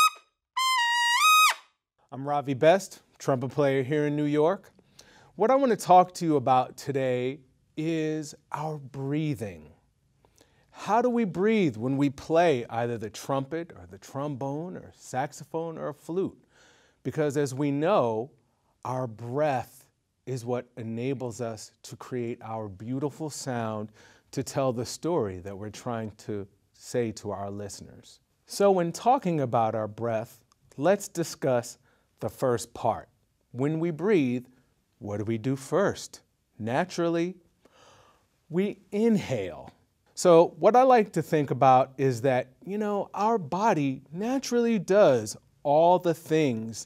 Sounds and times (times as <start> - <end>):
Speech: 2.1 - 4.8, 5.4 - 9.8, 10.7 - 16.4, 17.0 - 37.4, 38.5 - 46.8.